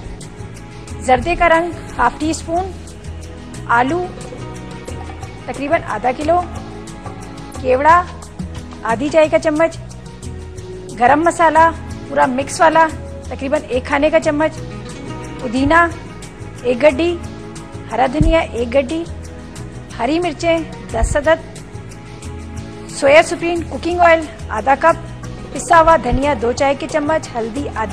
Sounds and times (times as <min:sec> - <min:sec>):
Music: 0:00.0 - 0:27.9
Speech: 0:01.0 - 0:02.8, 0:03.7 - 0:04.1, 0:05.5 - 0:06.5, 0:07.6 - 0:08.2, 0:08.8 - 0:09.8, 0:11.0 - 0:14.6, 0:15.4 - 0:16.0, 0:17.9 - 0:19.1, 0:20.0 - 0:21.4, 0:23.0 - 0:25.0, 0:25.6 - 0:27.9.